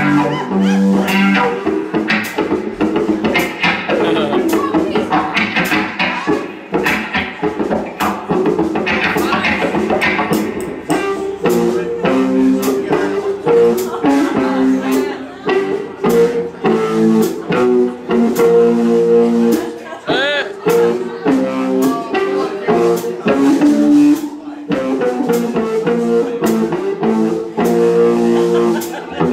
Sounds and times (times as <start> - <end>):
Music: 0.0 - 29.3
Speech: 3.9 - 6.6, 9.0 - 9.8, 11.5 - 17.6, 19.4 - 24.8.